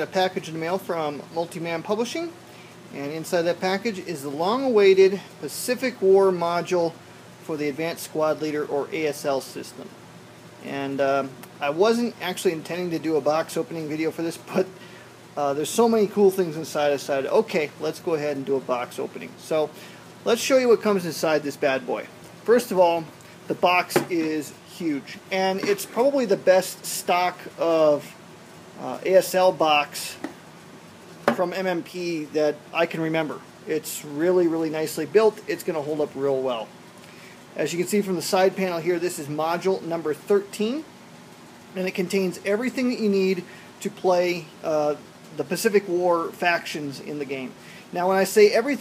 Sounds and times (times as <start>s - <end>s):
Speech: 0.0s - 9.9s, 10.6s - 14.8s, 15.4s - 28.2s, 28.8s - 30.3s, 31.3s - 36.7s, 37.6s - 40.9s, 41.7s - 48.8s.